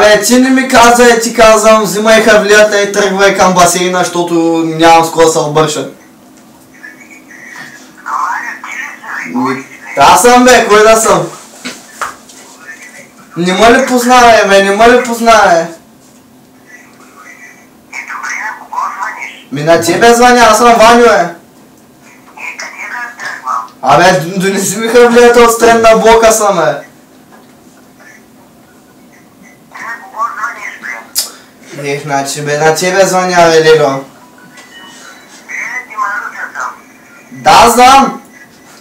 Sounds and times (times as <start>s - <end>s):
Male speech, man speaking: 0.0s - 6.0s, 9.2s - 11.4s, 12.6s - 15.8s, 19.5s - 21.4s, 23.8s - 27.0s, 31.6s - 34.1s, 37.3s - 38.3s.